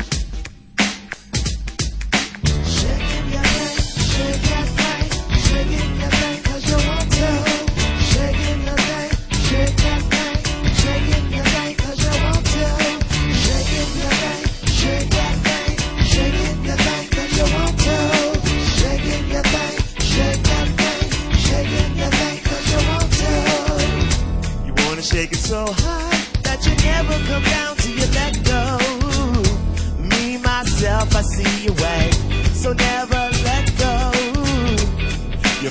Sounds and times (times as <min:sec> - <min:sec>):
Music: 0:00.0 - 0:35.7.